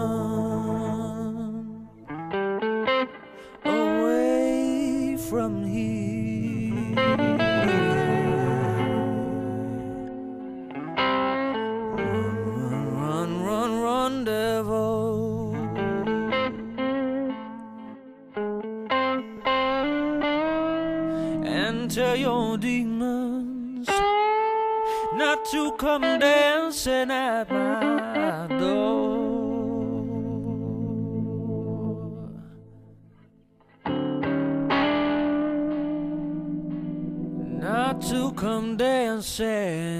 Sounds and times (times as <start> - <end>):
Music: 0.0 - 39.9.